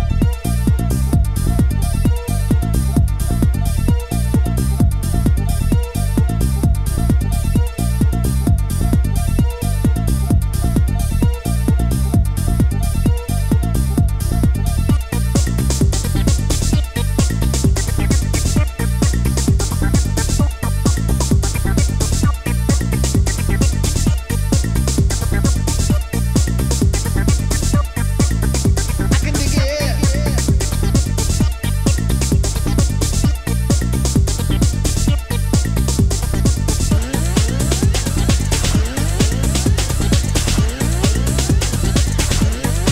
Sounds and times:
Techno: 0.0s - 42.9s.

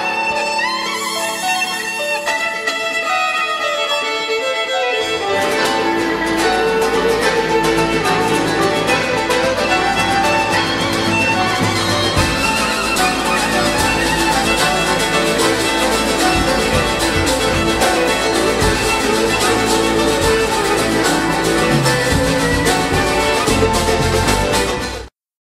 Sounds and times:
Violin, fiddle: 0.0s - 25.1s.

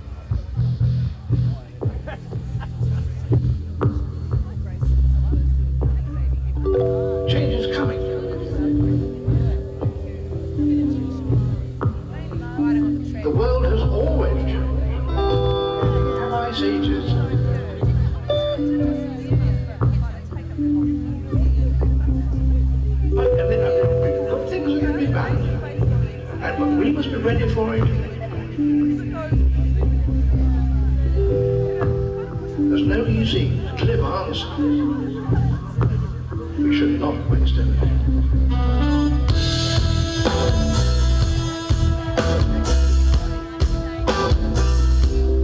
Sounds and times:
Speech: 0.0s - 38.4s
Music: 0.0s - 45.4s.

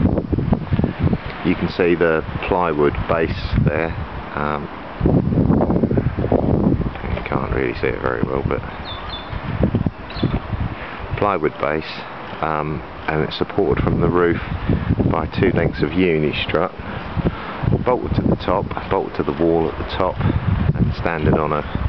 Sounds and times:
Speech: 1.4s - 4.7s, 7.0s - 8.7s, 11.2s - 14.4s, 15.1s - 16.8s, 17.8s - 20.2s, 20.8s - 21.7s.

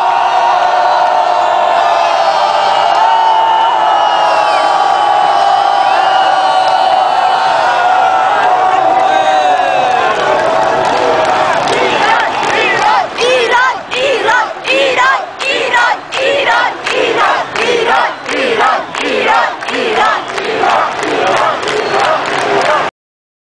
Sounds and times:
Cheering: 0.0s - 22.9s.

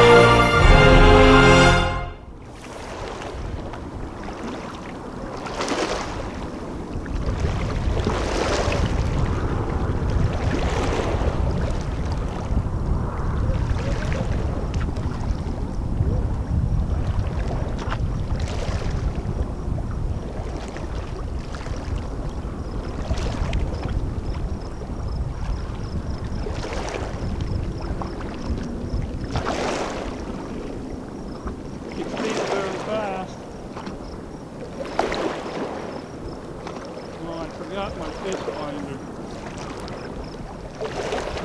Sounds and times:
Rowboat, canoe, kayak: 0.0s - 41.4s
Speech: 32.0s - 33.4s, 37.2s - 39.0s.

